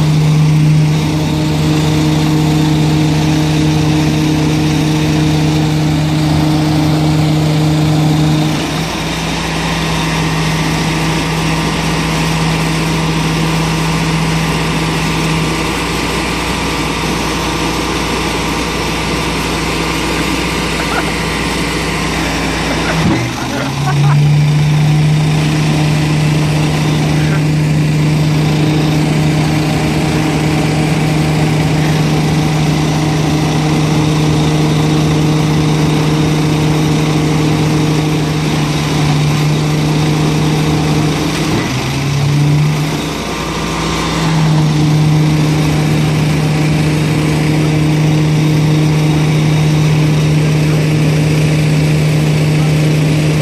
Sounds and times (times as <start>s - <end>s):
Vehicle: 0.0s - 53.4s.